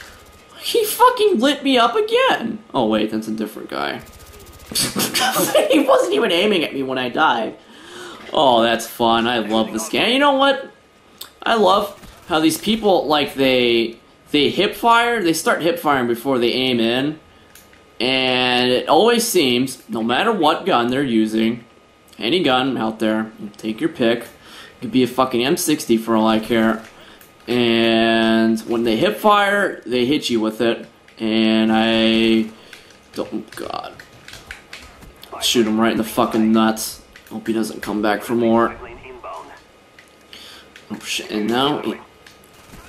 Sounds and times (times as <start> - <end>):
Chuckle, chortle: 4.7 - 5.7
Speech: 8.3 - 10.7, 35.3 - 39.6, 40.9 - 42.1.